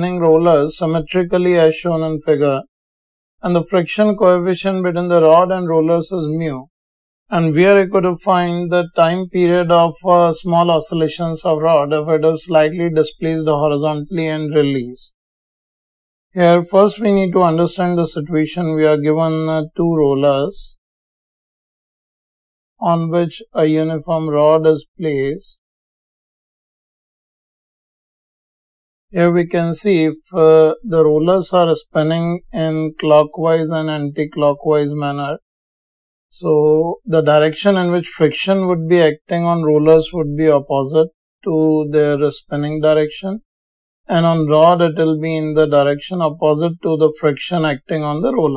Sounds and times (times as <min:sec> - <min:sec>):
Speech: 0:00.0 - 0:02.7, 0:03.4 - 0:06.7, 0:07.3 - 0:15.2, 0:16.4 - 0:20.8, 0:22.8 - 0:25.6, 0:29.2 - 0:35.4, 0:36.3 - 0:43.4, 0:44.1 - 0:48.5.